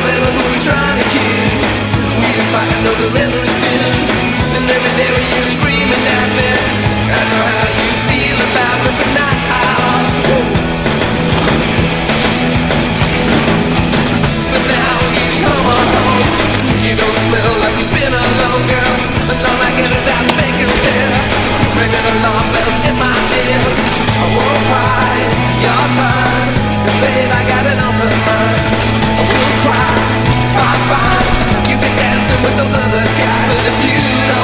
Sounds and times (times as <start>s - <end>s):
Bicycle: 0.0s - 34.4s
Music: 0.0s - 34.4s.